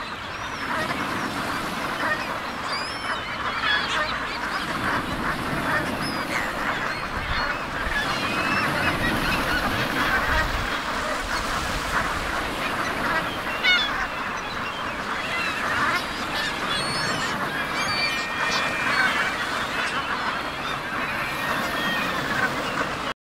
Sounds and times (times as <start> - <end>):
Quack: 0.0 - 23.1.